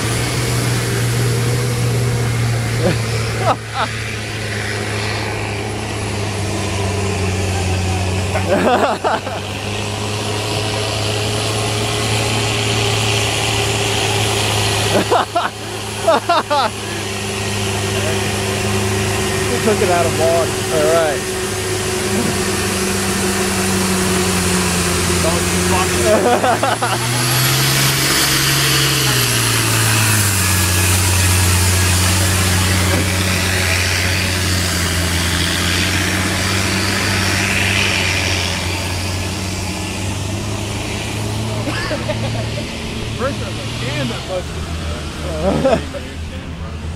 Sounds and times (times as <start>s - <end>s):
Vehicle: 0.0s - 46.9s
Speech: 19.5s - 21.2s, 25.2s - 26.4s, 43.2s - 46.9s.